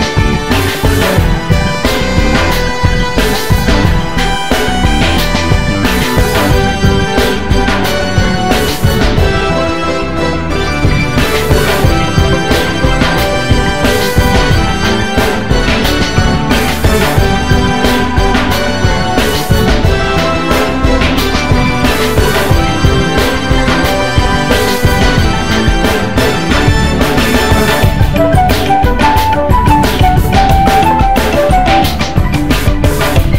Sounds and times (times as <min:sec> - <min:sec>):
Music: 0:00.0 - 0:33.3.